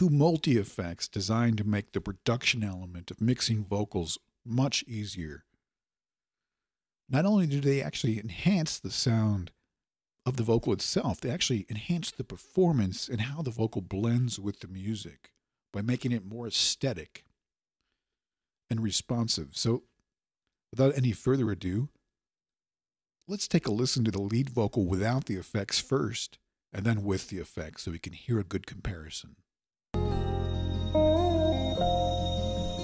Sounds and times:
Speech: 0:00.0 - 0:05.5, 0:07.1 - 0:09.6, 0:10.2 - 0:17.3, 0:18.7 - 0:20.0, 0:20.7 - 0:22.0, 0:23.3 - 0:29.4.

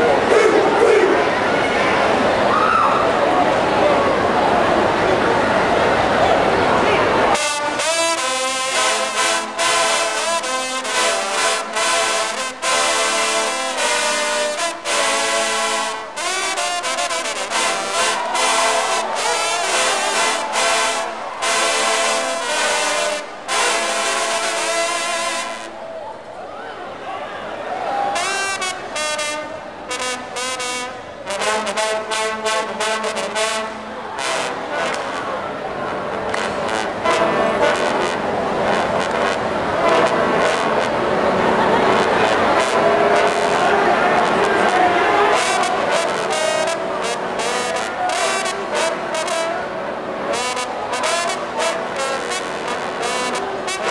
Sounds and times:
Speech: 0:00.0 - 0:07.9, 0:31.7 - 0:38.0, 0:40.4 - 0:49.7
Music: 0:07.3 - 0:25.8, 0:28.2 - 0:53.9.

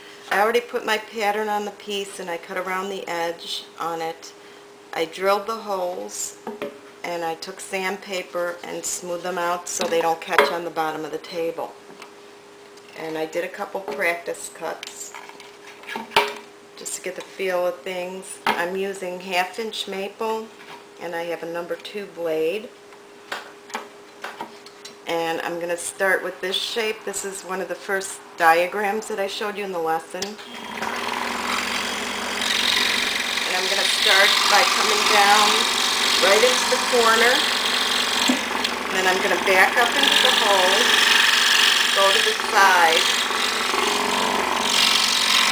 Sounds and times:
Speech: 0:00.3 - 0:04.3, 0:05.0 - 0:06.4, 0:07.1 - 0:11.8, 0:13.0 - 0:15.2, 0:16.8 - 0:22.7, 0:25.1 - 0:30.4, 0:33.5 - 0:37.5, 0:39.0 - 0:40.9, 0:42.0 - 0:43.1.

